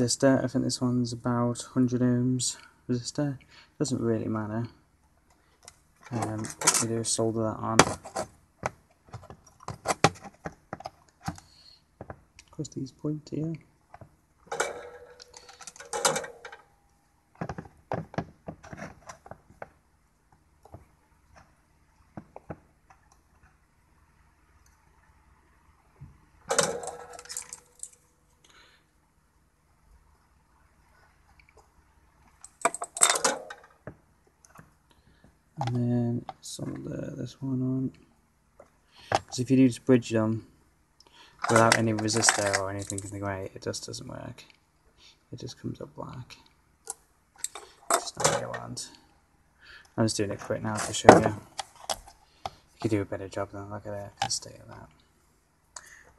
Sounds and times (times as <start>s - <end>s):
Inside, small room: 0.0s - 56.1s.